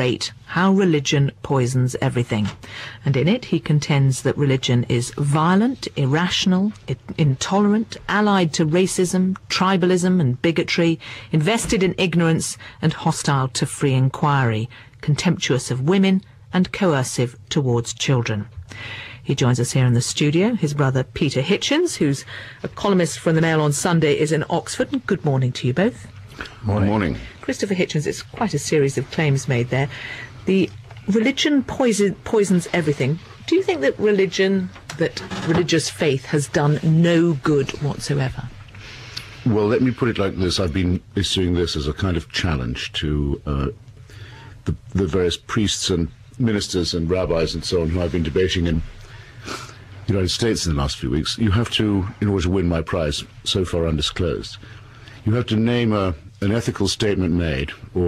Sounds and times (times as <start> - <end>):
Speech: 0.0 - 18.5, 19.3 - 26.0, 26.6 - 29.9, 30.5 - 38.5, 39.4 - 43.8, 44.7 - 48.9, 50.1 - 54.6, 55.2 - 58.0.